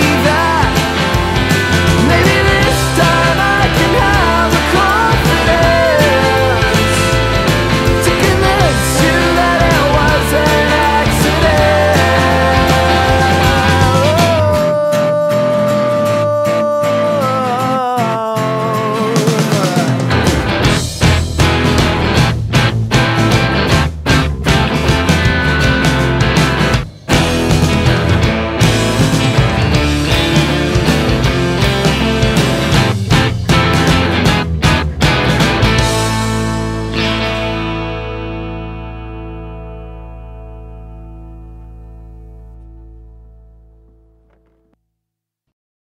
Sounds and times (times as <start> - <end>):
Grunge: 0.0 - 44.6.